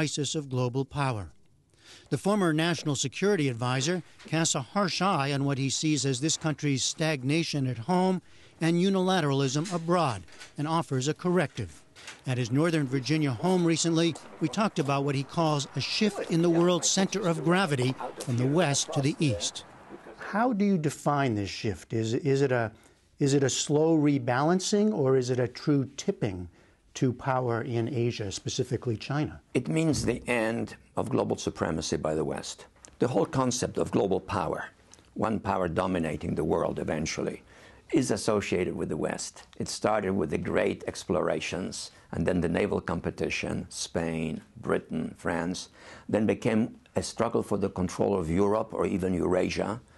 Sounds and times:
Speech: 0.0s - 1.4s, 2.1s - 19.6s, 20.2s - 49.8s.

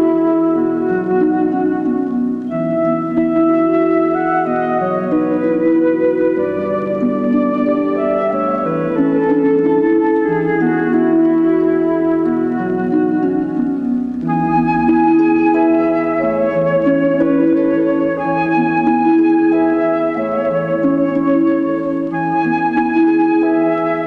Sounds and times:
Music: 0.0s - 24.0s.

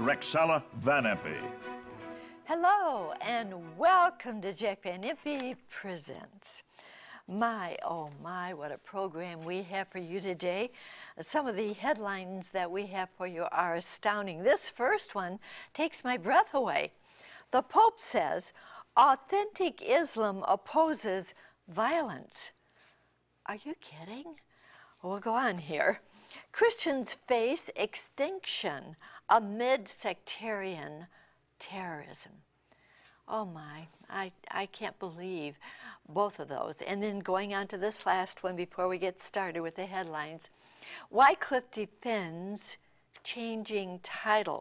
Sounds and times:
Speech: 0.0s - 1.5s, 23.5s - 24.4s.

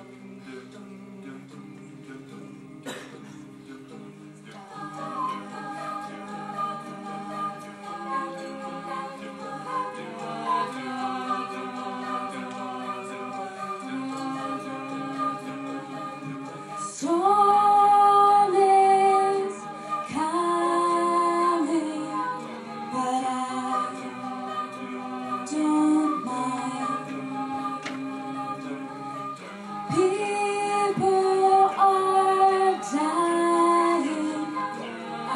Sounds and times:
Music: 0.0s - 35.3s.

